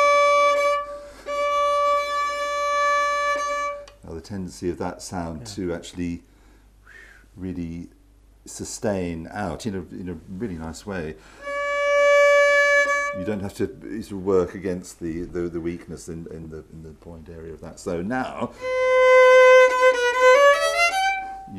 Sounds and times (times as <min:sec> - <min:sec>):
Violin, fiddle: 0:00.0 - 0:04.0, 0:11.4 - 0:13.5, 0:18.6 - 0:21.5
Inside, small room: 0:00.0 - 0:21.5
Speech: 0:04.0 - 0:06.2, 0:07.4 - 0:11.2, 0:13.2 - 0:18.6.